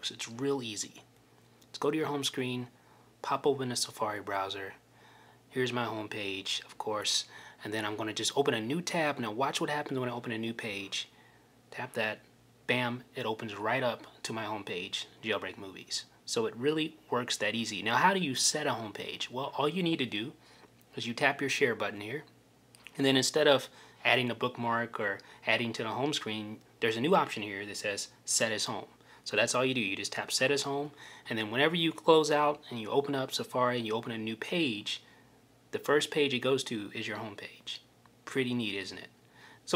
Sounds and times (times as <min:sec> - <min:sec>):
Speech: 0:00.0 - 0:01.1, 0:01.7 - 0:04.8, 0:05.5 - 0:11.1, 0:11.7 - 0:22.3, 0:22.9 - 0:35.1, 0:35.7 - 0:39.7.